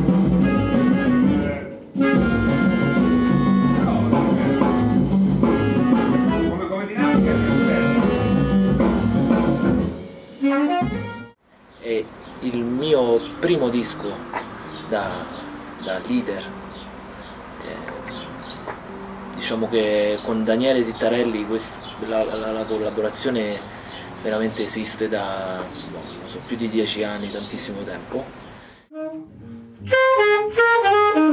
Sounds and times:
Music: 0.0s - 11.4s, 12.4s - 22.4s, 24.2s - 27.4s, 28.8s - 31.3s
Speech: 3.8s - 4.8s, 6.4s - 8.0s, 11.8s - 14.3s, 14.9s - 16.6s, 17.6s - 18.1s, 19.4s - 28.3s.

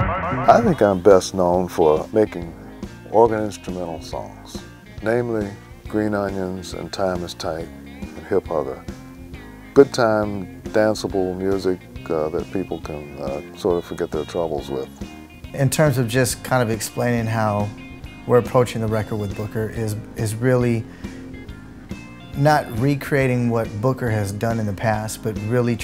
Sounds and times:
Speech: 0.0s - 8.8s, 9.8s - 15.0s, 15.6s - 17.7s, 18.3s - 20.9s, 22.4s - 25.8s
Music: 0.0s - 25.8s.

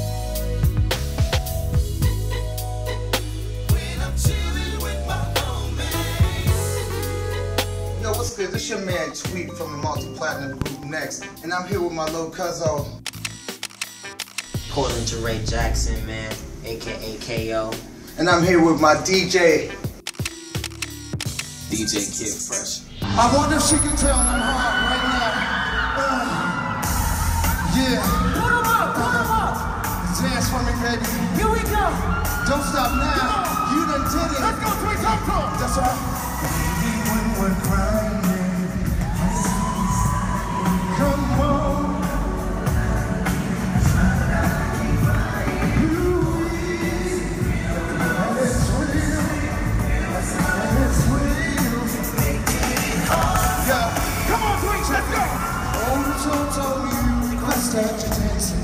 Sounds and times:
Music: 0.0s - 58.6s
Speech: 8.0s - 12.9s, 14.7s - 19.7s, 21.7s - 25.4s.

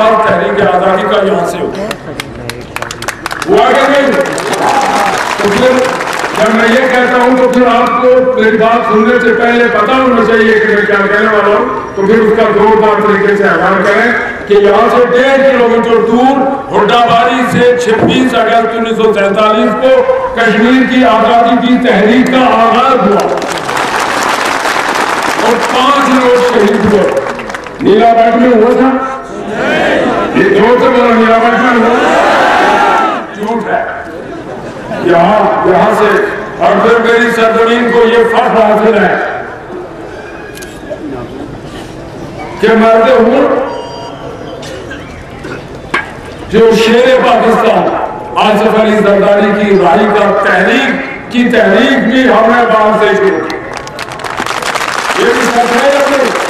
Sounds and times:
Male speech, man speaking: 0.0s - 2.7s, 3.5s - 23.4s, 25.4s - 29.2s, 30.3s - 32.0s, 33.3s - 34.0s, 35.0s - 39.4s, 42.6s - 43.8s, 46.5s - 53.7s, 55.2s - 56.4s
Narration, monologue: 0.0s - 23.8s, 25.2s - 29.3s, 30.3s - 32.0s, 33.2s - 40.0s, 42.0s - 43.8s, 45.6s - 53.7s, 55.1s - 56.5s.

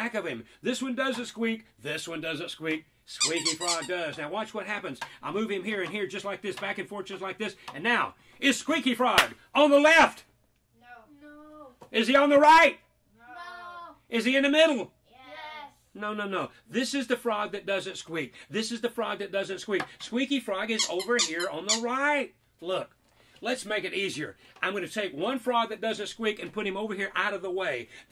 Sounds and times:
Speech: 16.0s - 27.9s.

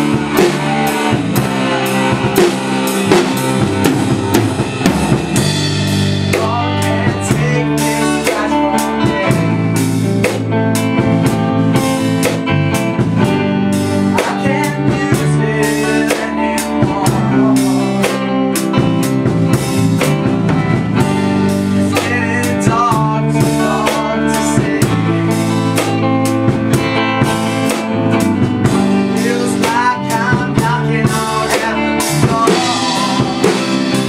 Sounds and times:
Music: 0.0s - 34.0s.

